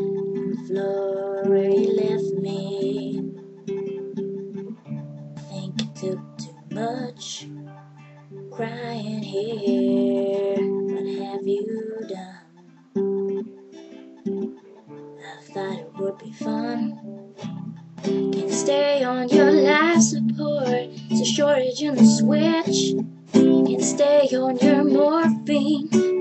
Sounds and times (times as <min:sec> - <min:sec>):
Female singing: 0:00.0 - 0:03.4, 0:05.4 - 0:07.5, 0:08.6 - 0:12.6, 0:15.2 - 0:17.1, 0:18.3 - 0:26.2
Music: 0:00.0 - 0:26.2.